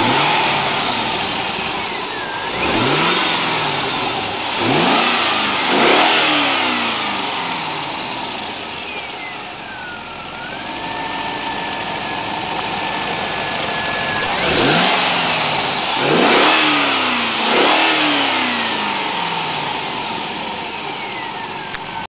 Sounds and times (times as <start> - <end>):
Accelerating, revving, vroom: 0.0 - 8.5, 14.0 - 20.7
Vehicle: 0.0 - 22.0.